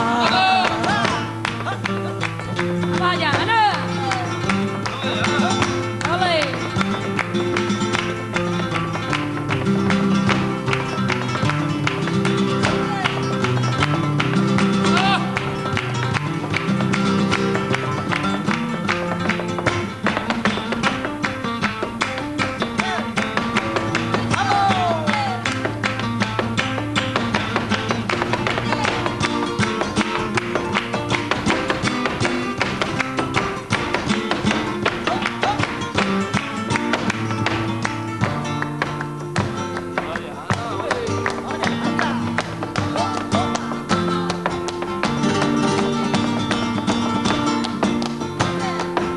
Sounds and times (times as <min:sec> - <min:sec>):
Flamenco: 0:00.0 - 0:49.1.